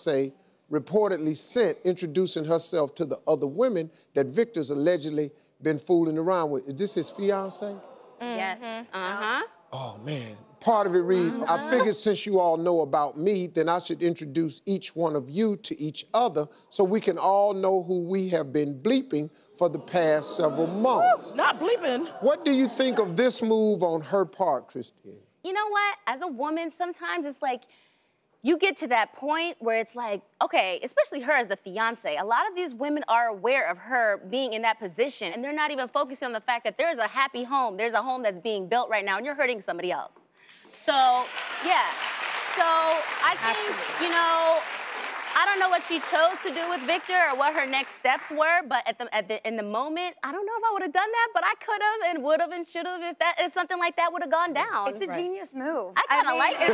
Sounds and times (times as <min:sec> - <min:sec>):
Speech: 0:07.4 - 0:12.2, 0:54.6 - 0:56.7.